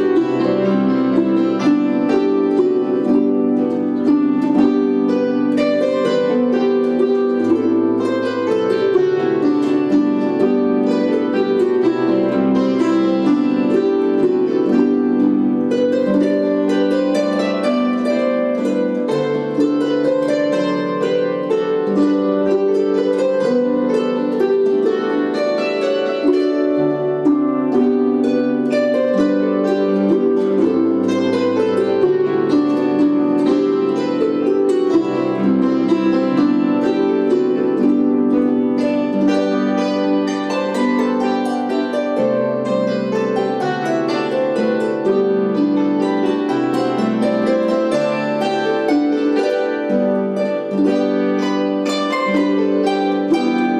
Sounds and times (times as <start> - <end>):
Music: 0.0 - 53.8.